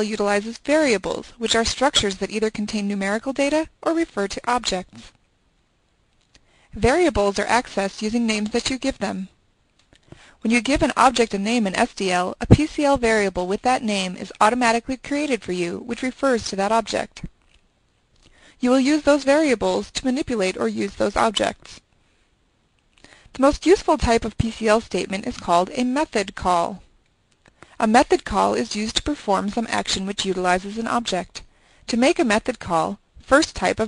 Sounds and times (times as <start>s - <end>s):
Speech: 0.0s - 5.1s, 6.8s - 9.3s, 10.4s - 17.3s, 18.6s - 21.8s, 23.4s - 26.9s, 27.8s - 33.8s.